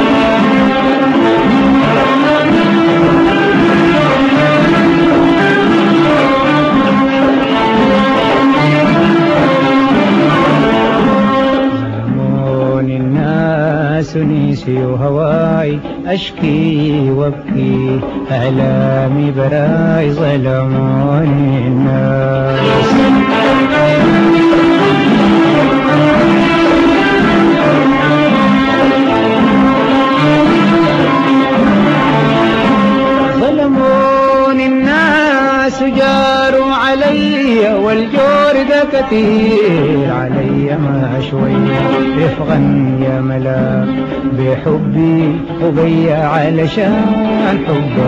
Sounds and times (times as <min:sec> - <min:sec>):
Music: 0:00.0 - 0:48.0.